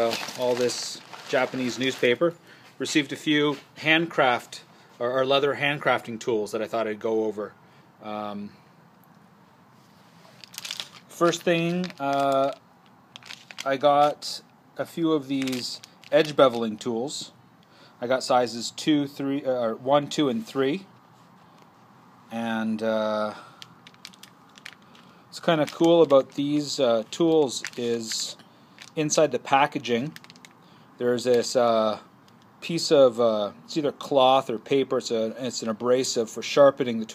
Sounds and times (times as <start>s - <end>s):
Speech: 0.0s - 8.6s, 11.1s - 12.6s, 13.6s - 17.4s, 18.0s - 20.9s, 22.3s - 23.4s, 25.3s - 28.4s, 29.0s - 30.2s, 31.0s - 37.1s.